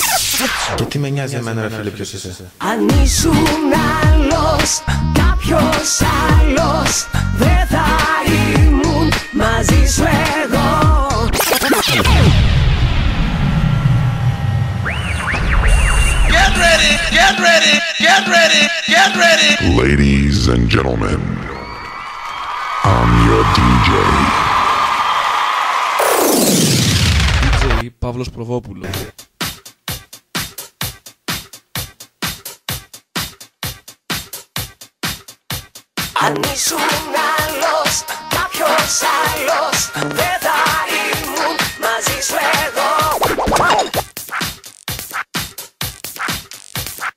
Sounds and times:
Music: 2.6s - 19.8s, 28.9s - 47.1s.

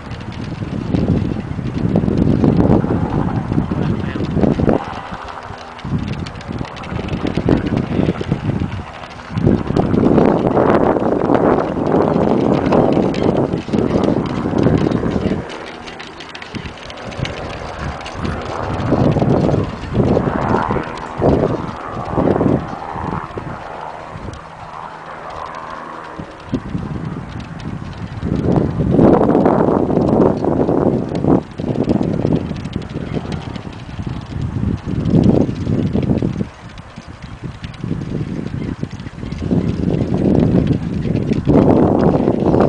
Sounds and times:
Clip-clop: 0.0s - 42.6s.

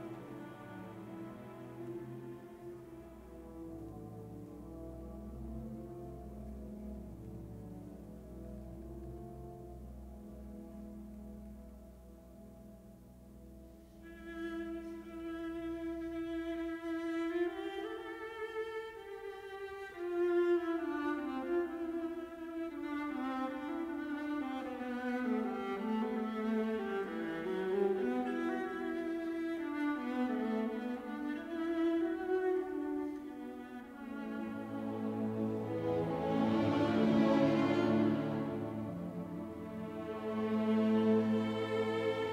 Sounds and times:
Violin, fiddle: 0.0s - 4.6s, 14.0s - 42.3s.

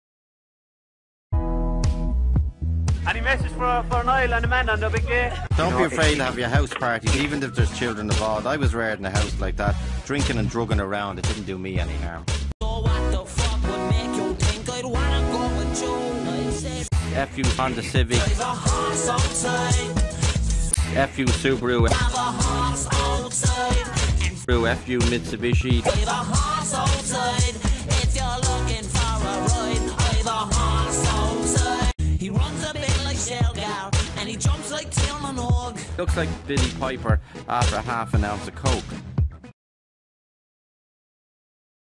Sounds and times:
Music: 1.3s - 39.6s
Speech: 3.1s - 12.3s, 17.1s - 18.4s, 20.8s - 22.0s, 24.4s - 26.0s, 36.0s - 39.0s.

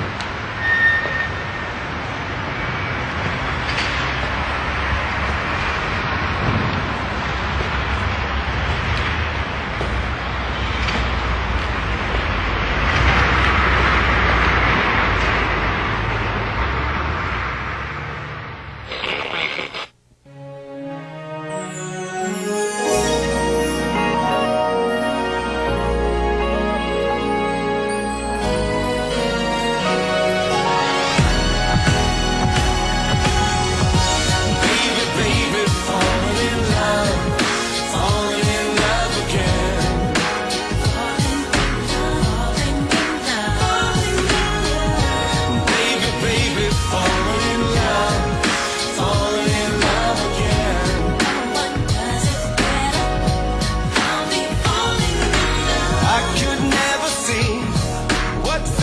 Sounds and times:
Music: 20.2s - 58.8s.

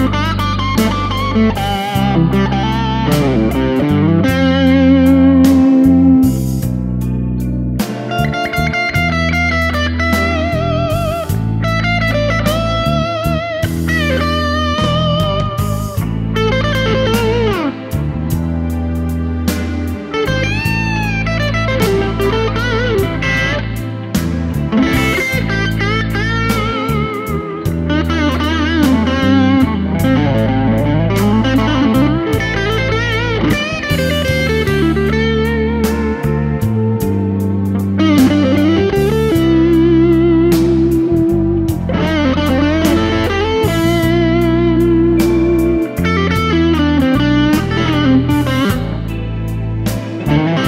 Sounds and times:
Bass guitar: 0.0s - 50.6s
Electric guitar: 0.0s - 50.6s.

